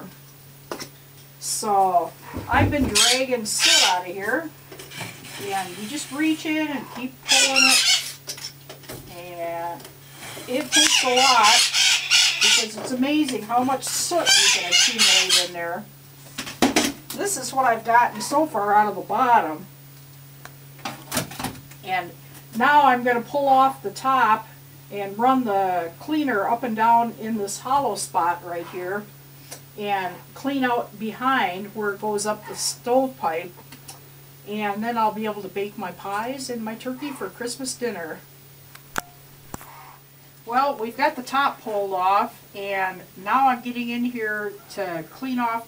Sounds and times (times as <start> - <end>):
Speech: 1.4 - 4.5, 5.4 - 8.0, 9.1 - 9.9, 10.5 - 11.7, 12.4 - 15.9, 17.2 - 19.7, 21.8 - 29.1, 29.8 - 33.6, 34.5 - 38.3, 40.5 - 45.6.